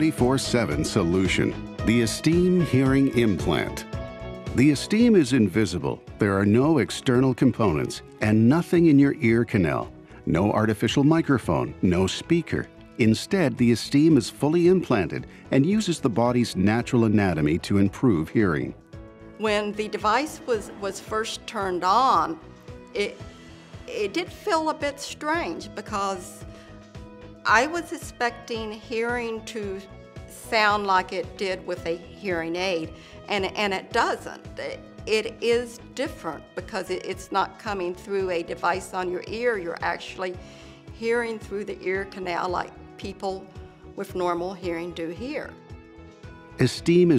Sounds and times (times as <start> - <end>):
Speech: 0.0 - 3.8, 4.6 - 18.8, 19.4 - 22.4, 23.0 - 23.2, 30.4 - 40.4, 46.6 - 47.1
Music: 0.0 - 47.1.